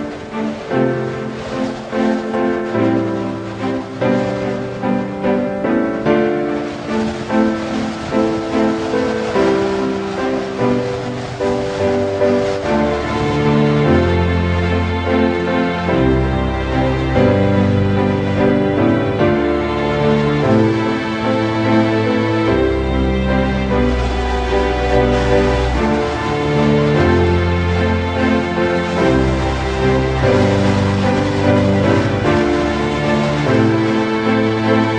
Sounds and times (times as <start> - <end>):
Music: 0.0 - 34.9.